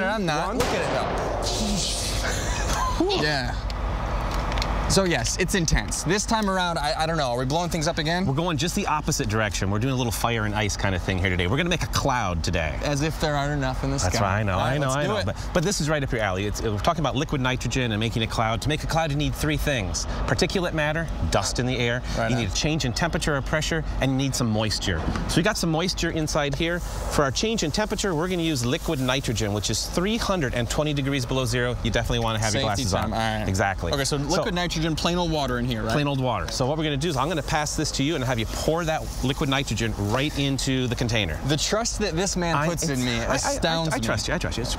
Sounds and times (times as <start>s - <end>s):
Speech: 4.9s - 44.7s.